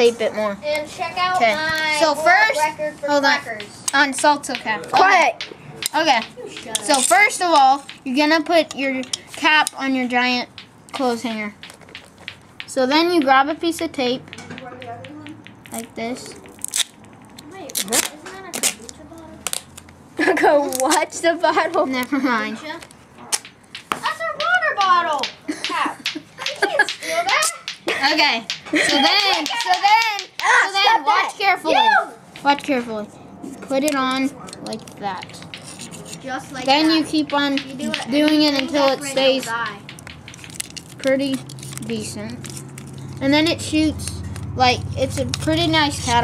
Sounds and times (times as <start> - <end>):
Inside, small room: 0.0 - 46.2
Laughter: 20.2 - 20.6, 25.5 - 27.3, 27.9 - 29.8.